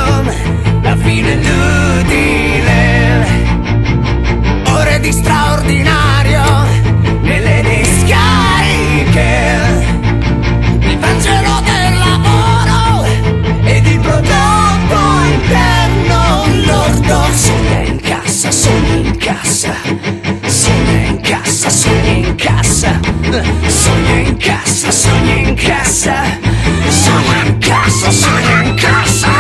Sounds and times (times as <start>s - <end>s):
Punk rock: 4.6s - 10.2s, 10.8s - 19.9s, 20.5s - 29.4s.